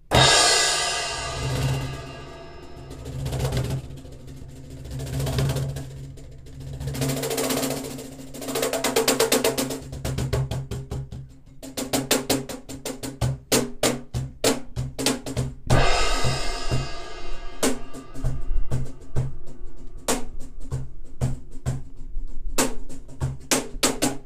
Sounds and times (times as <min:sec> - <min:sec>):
Cymbal: 0:00.0 - 0:09.0, 0:15.7 - 0:20.6.